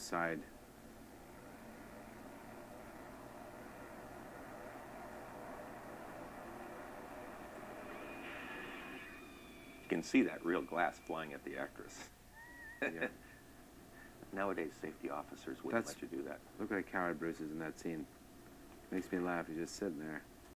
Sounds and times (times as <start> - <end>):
Speech: 0.0 - 0.5, 9.9 - 12.1, 12.8 - 13.1, 14.3 - 18.1, 18.9 - 20.2.